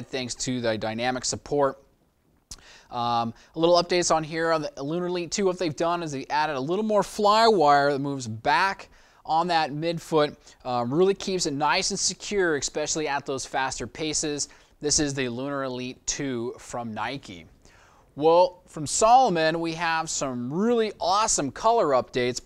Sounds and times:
Speech: 0.0s - 1.9s, 2.9s - 17.5s, 18.2s - 22.4s.

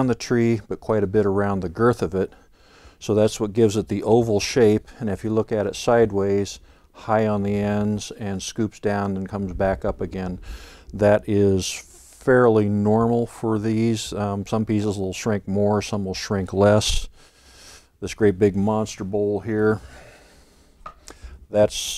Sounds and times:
Speech: 0.0s - 2.4s, 3.0s - 17.1s, 18.0s - 19.9s, 21.5s - 21.9s.

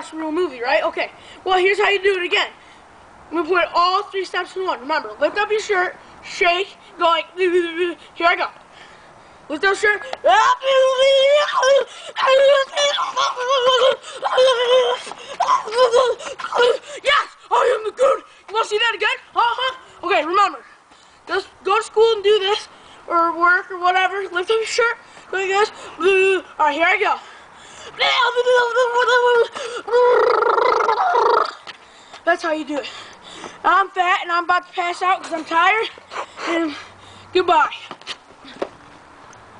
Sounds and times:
Speech: 0.0s - 2.6s, 3.3s - 8.6s, 9.5s - 15.0s, 15.7s - 20.7s, 21.3s - 27.2s, 28.0s - 29.5s, 32.2s - 32.9s, 33.6s - 35.9s, 37.4s - 37.9s.

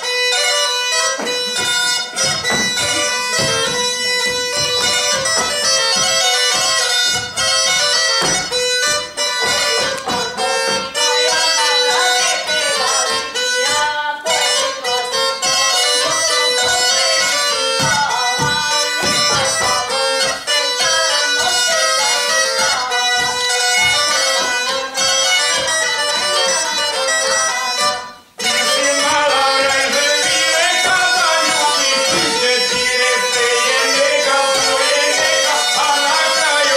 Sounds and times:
Music: 0.0s - 36.7s.

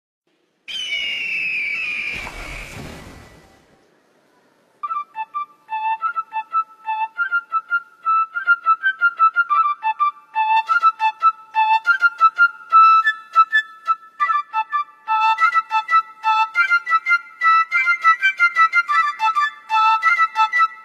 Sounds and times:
Music: 4.8s - 20.8s.

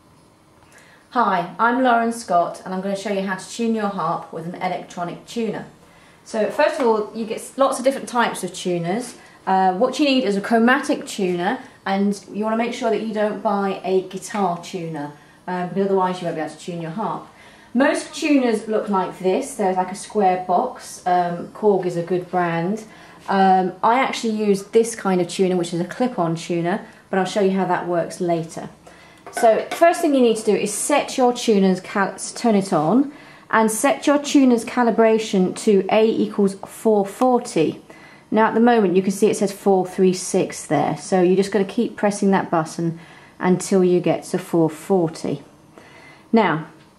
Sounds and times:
Speech: 1.1s - 45.5s, 46.3s - 46.8s.

